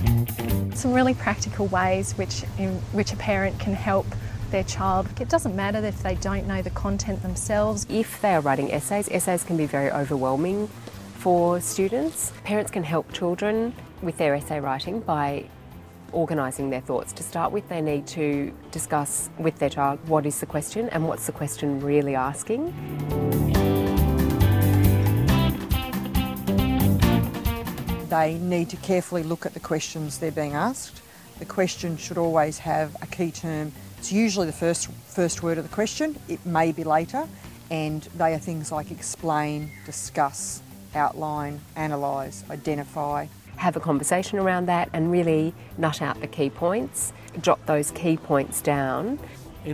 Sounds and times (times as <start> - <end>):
Music: 0.0 - 49.7
Female speech, woman speaking: 0.8 - 15.5, 16.1 - 22.8, 28.1 - 49.7.